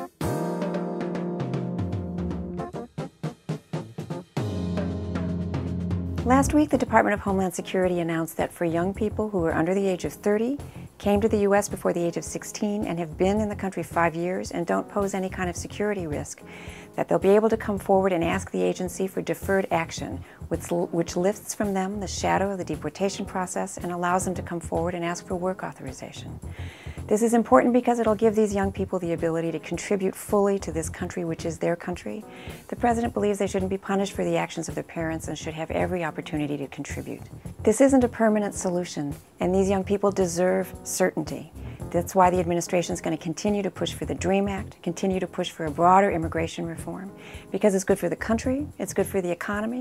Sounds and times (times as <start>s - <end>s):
Music: 0.0s - 49.8s
Speech: 6.3s - 26.4s, 27.1s - 49.8s.